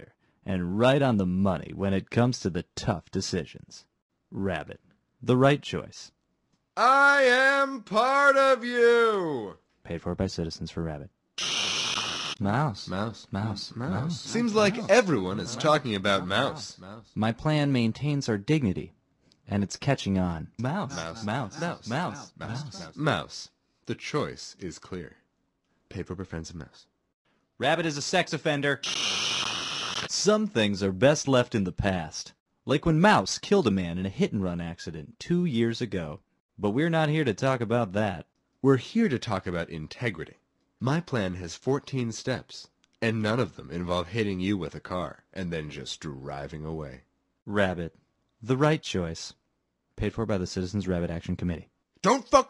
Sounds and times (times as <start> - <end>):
Speech: 0.0 - 6.2, 6.8 - 11.1, 12.4 - 25.2, 25.9 - 26.9, 27.6 - 28.8, 30.1 - 49.4, 50.0 - 52.5.